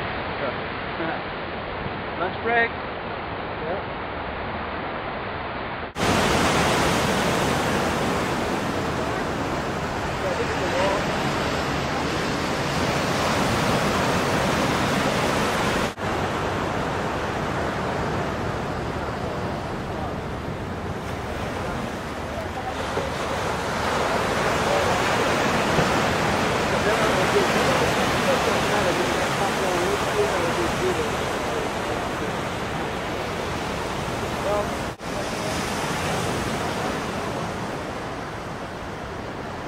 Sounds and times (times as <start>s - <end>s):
Outside, rural or natural: 0.0s - 39.6s
Waves, surf: 0.0s - 39.6s
Speech: 2.2s - 2.8s, 10.2s - 11.2s, 26.7s - 32.9s, 34.4s - 35.7s.